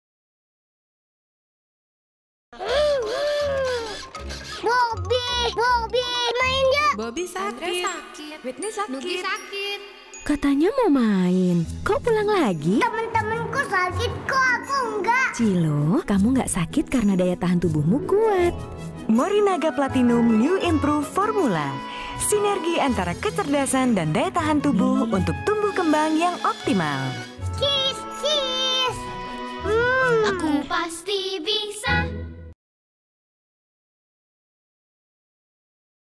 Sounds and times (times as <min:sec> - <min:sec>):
Music: 0:02.6 - 0:32.6.